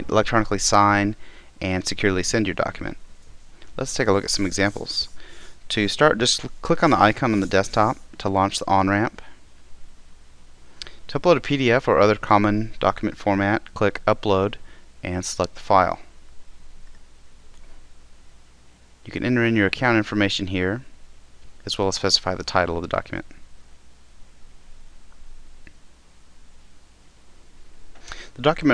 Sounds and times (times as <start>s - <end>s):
Speech: 0.0s - 3.0s, 3.8s - 9.3s, 11.1s - 16.1s, 19.0s - 20.9s, 21.6s - 23.4s, 28.3s - 28.7s.